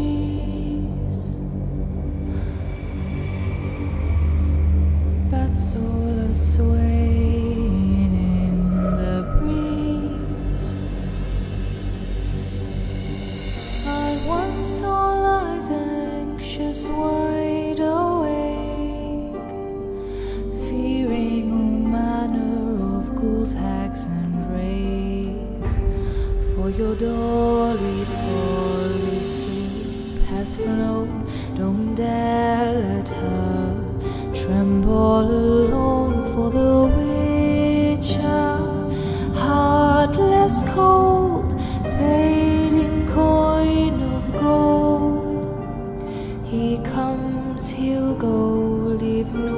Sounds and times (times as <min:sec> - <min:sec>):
Lullaby: 0:00.0 - 0:49.5.